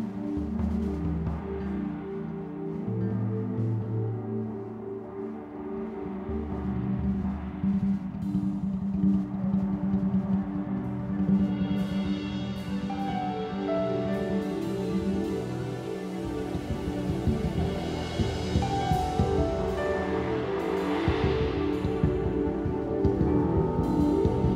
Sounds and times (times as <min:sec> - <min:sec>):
Music: 0:00.0 - 0:24.5.